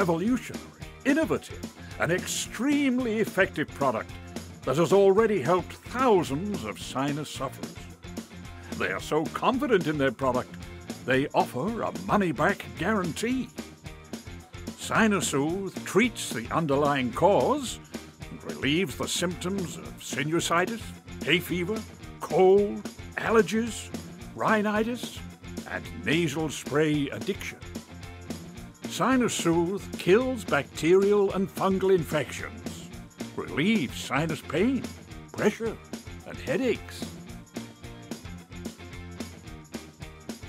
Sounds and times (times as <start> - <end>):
Speech: 0.0 - 4.1, 4.7 - 7.9, 8.8 - 13.5, 14.8 - 17.8, 18.4 - 27.6, 28.9 - 37.1
Music: 0.0 - 40.4.